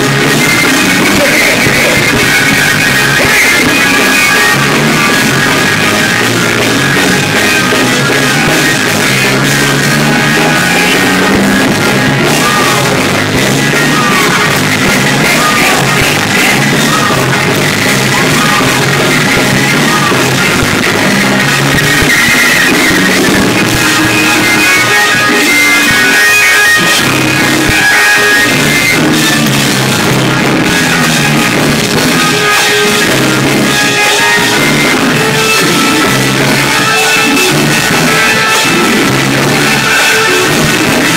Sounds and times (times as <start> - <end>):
Music: 0.0 - 41.1.